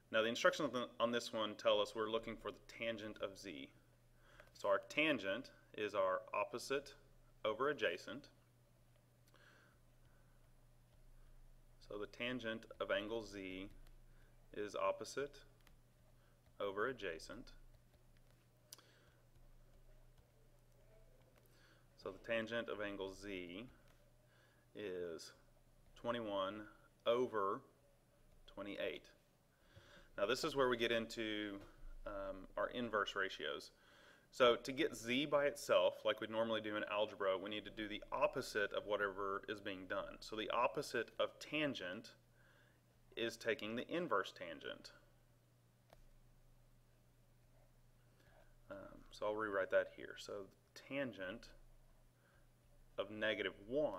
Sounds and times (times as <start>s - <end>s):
Speech: 0.1s - 3.8s, 4.6s - 8.4s, 11.8s - 13.8s, 14.5s - 15.5s, 16.6s - 17.6s, 22.0s - 23.8s, 24.8s - 25.4s, 26.0s - 27.8s, 28.5s - 29.2s, 30.2s - 42.2s, 43.2s - 45.0s, 48.7s - 51.6s, 53.0s - 53.9s.